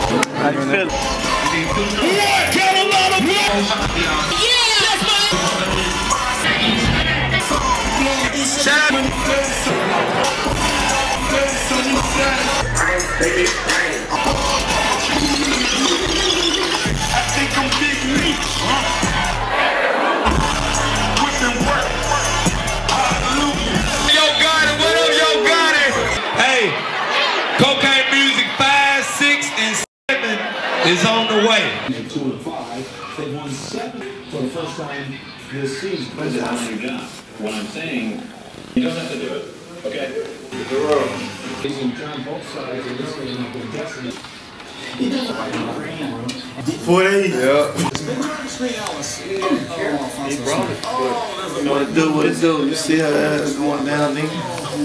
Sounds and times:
Music: 0.0 - 19.6, 20.3 - 26.2.

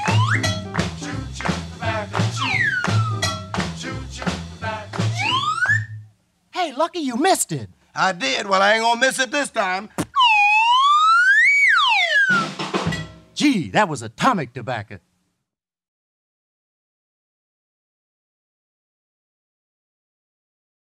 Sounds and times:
Siren: 0.0 - 0.4, 2.4 - 3.3, 5.1 - 6.0, 10.1 - 12.6.

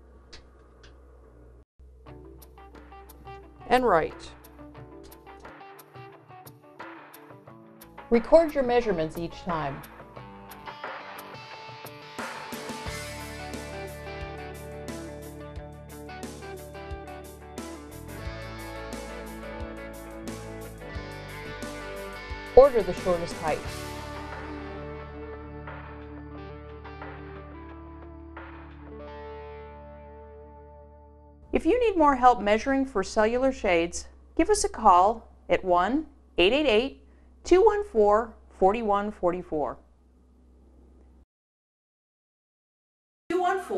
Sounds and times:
Music: 1.8 - 32.9
Speech: 3.7 - 4.4, 8.1 - 9.8, 22.6 - 23.7, 31.6 - 39.8, 43.3 - 43.7.

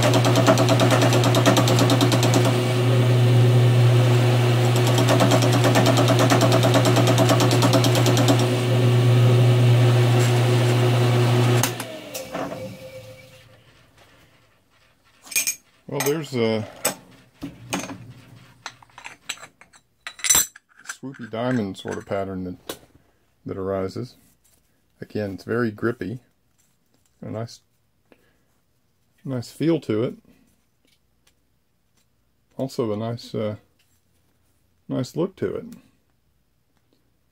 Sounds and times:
Tools: 15.2 - 16.2, 18.6 - 22.2
Speech: 15.9 - 16.8, 21.0 - 22.7, 23.4 - 24.2, 25.0 - 26.3, 27.2 - 27.7, 29.2 - 30.3, 32.6 - 33.7, 34.9 - 35.9.

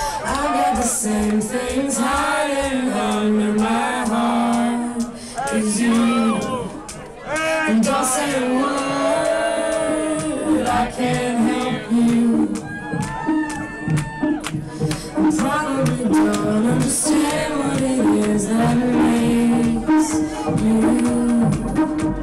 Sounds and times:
House music: 0.0 - 22.2.

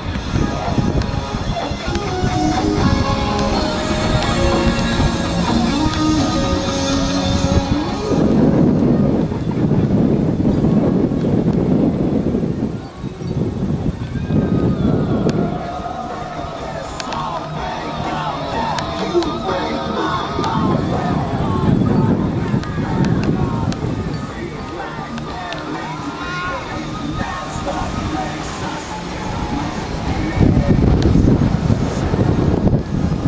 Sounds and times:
Music: 0.0 - 10.0, 13.0 - 33.2.

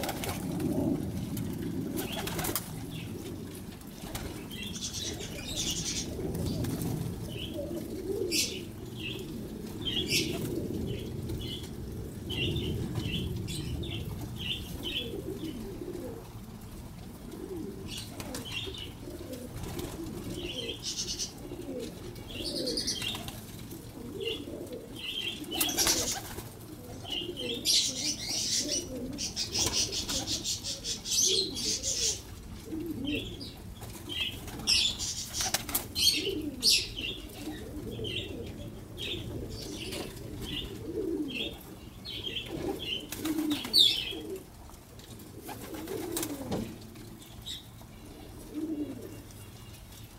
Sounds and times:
Bird flight, flapping wings: 0.0 - 3.0, 3.8 - 7.2, 18.0 - 18.7, 19.3 - 20.4, 22.8 - 23.6, 25.5 - 26.6, 29.4 - 30.6, 33.8 - 36.1, 42.5 - 44.0, 45.4 - 46.8.

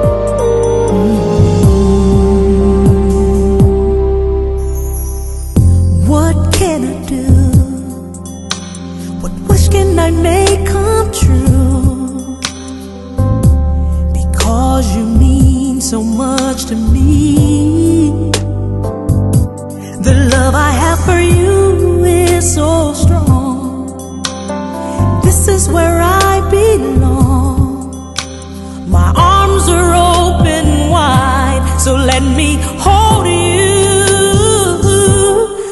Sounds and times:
Music: 0.0 - 35.7.

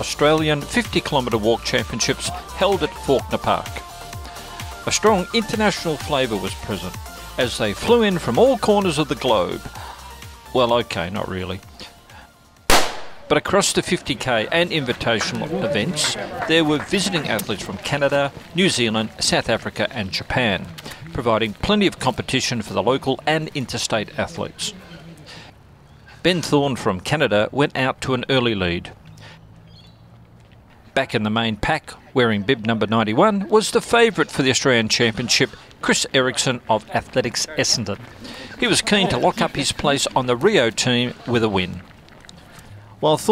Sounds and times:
Speech: 0.0 - 3.8, 4.8 - 9.6, 10.5 - 11.6, 13.3 - 25.2, 26.2 - 29.0, 31.0 - 41.8, 43.0 - 43.3
Outside, rural or natural: 0.0 - 43.3
Run: 13.7 - 25.5, 29.5 - 31.1, 31.8 - 43.3.

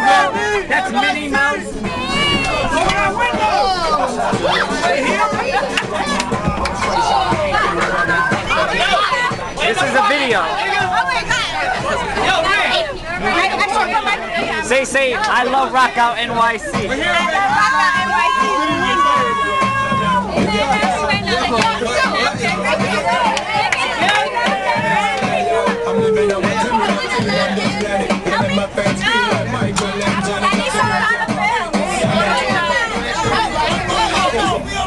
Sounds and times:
Music: 0.0 - 34.8.

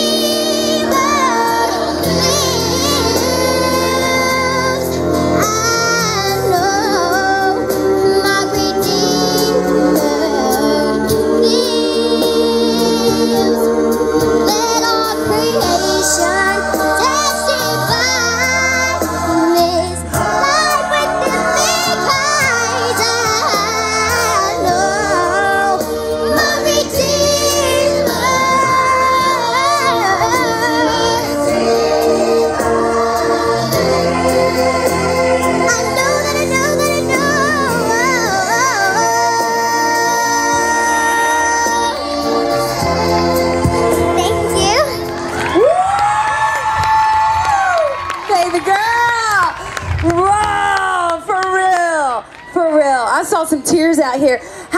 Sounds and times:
Singing: 0.0 - 44.2
Music: 0.0 - 54.7.

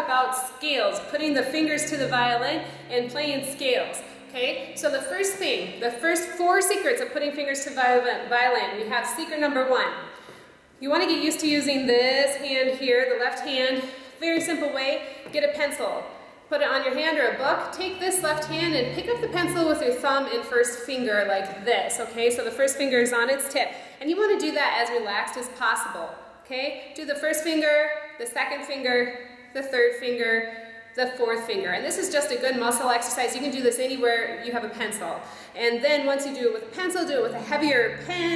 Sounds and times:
Speech: 0.0 - 10.0, 10.8 - 38.3.

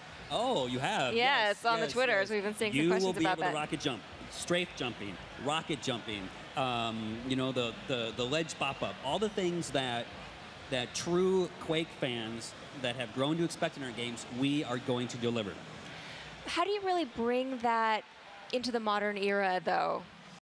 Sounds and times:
Speech: 0.3 - 10.1, 10.7 - 15.6.

